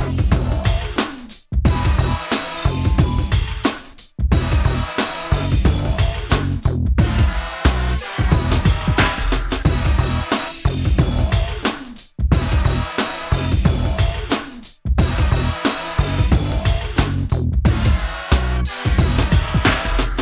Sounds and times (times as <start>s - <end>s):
Music: 0.0s - 20.2s.